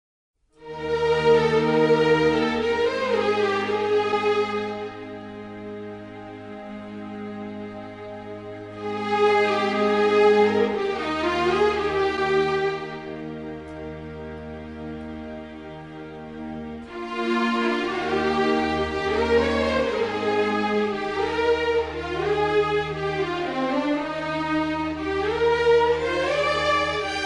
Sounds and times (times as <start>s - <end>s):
Sad music: 0.6s - 27.2s.